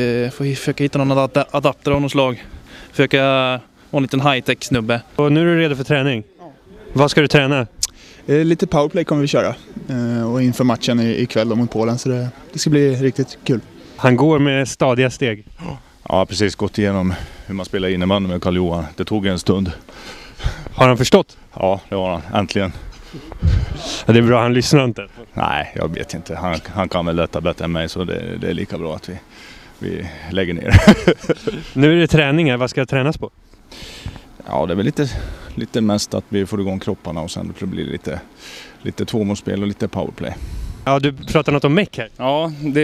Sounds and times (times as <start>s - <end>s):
Speech: 0.0s - 19.8s, 20.8s - 22.8s, 23.5s - 29.2s, 29.8s - 30.8s, 31.8s - 33.3s, 34.4s - 42.8s.